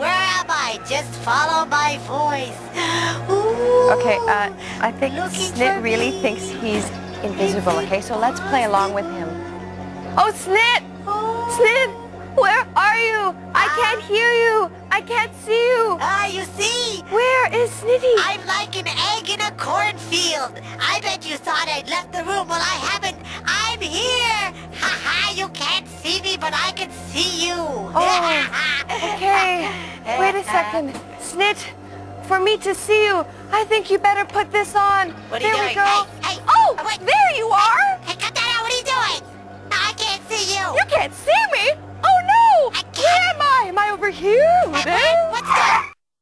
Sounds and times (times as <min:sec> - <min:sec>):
Music: 0:00.0 - 0:46.0.